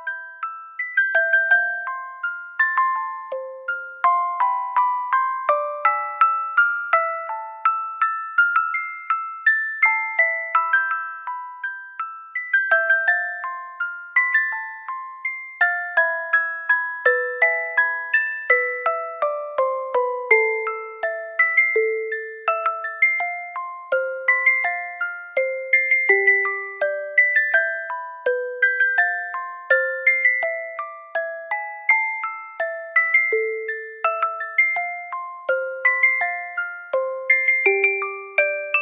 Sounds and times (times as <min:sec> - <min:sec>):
Music: 0:00.0 - 0:38.8.